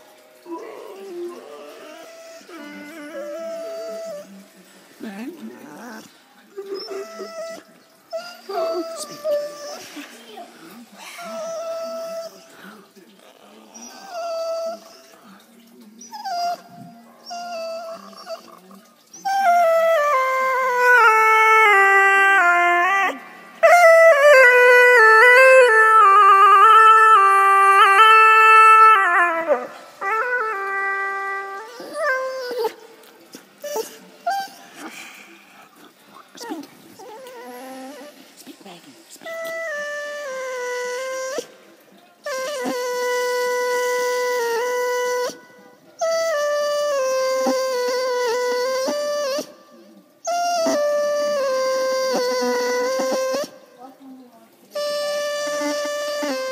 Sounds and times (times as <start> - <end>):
Inside, small room: 0.0 - 56.5.